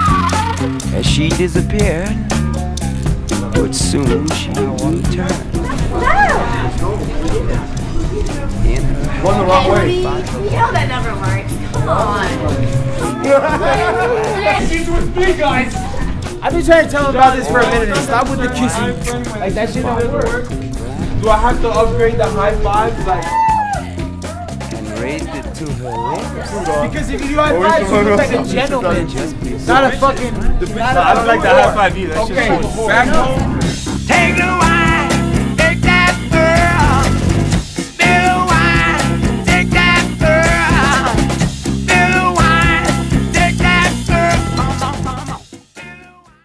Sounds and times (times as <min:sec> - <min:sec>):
Music: 0:00.0 - 0:46.4.